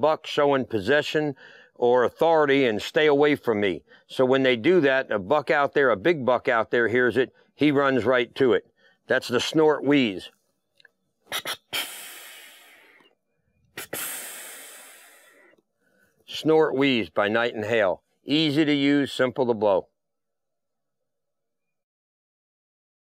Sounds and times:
Speech: 0.0s - 10.4s, 16.3s - 19.9s.

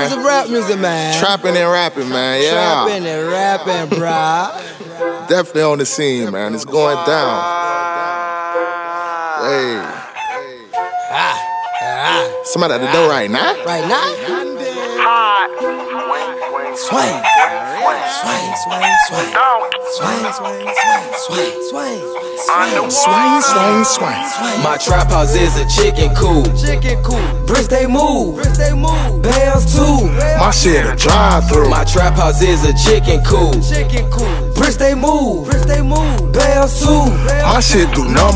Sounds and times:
Music: 0.0s - 38.3s.

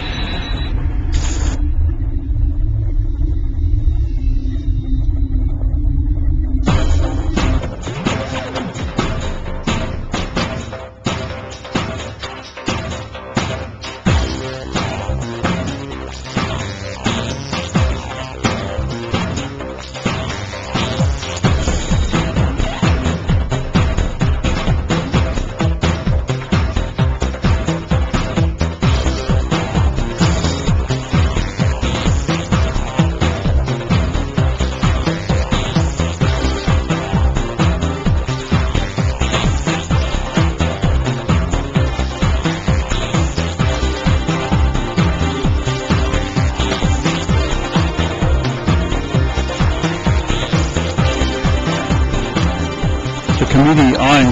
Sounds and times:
Music: 0.0s - 54.3s.

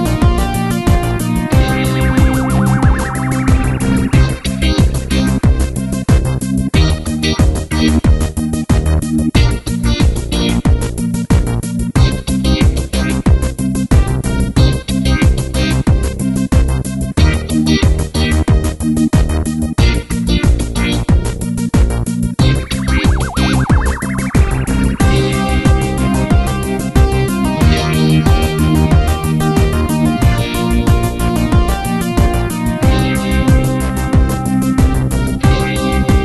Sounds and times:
Music: 0.0s - 36.2s.

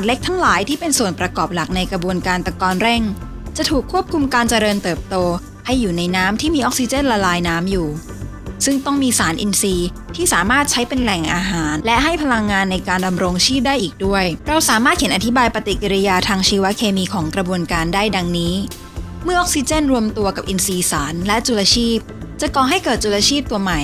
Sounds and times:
Speech: 0.0s - 8.0s, 8.6s - 23.8s
Music: 0.0s - 23.8s.

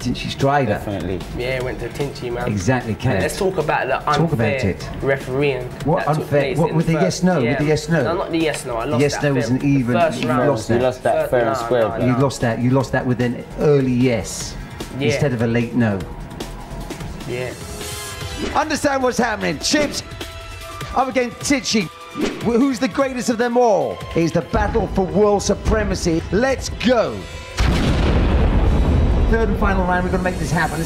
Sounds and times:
Speech: 0.0s - 16.1s, 20.9s - 27.3s, 29.3s - 30.8s
Music: 0.0s - 30.8s.

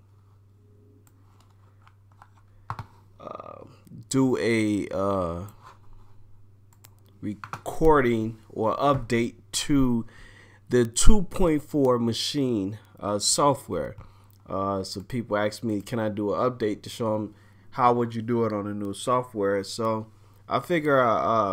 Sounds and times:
Speech: 3.2s - 5.6s, 7.2s - 10.1s, 10.7s - 21.5s.

